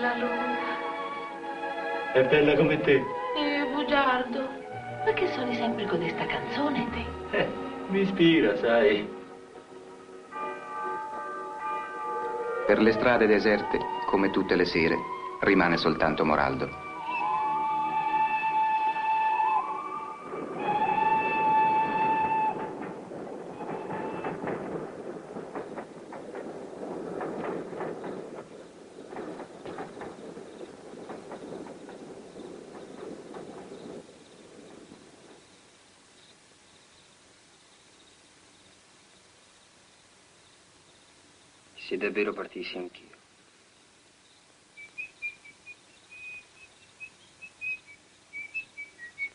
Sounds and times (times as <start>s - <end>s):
Speech: 41.8s - 43.2s.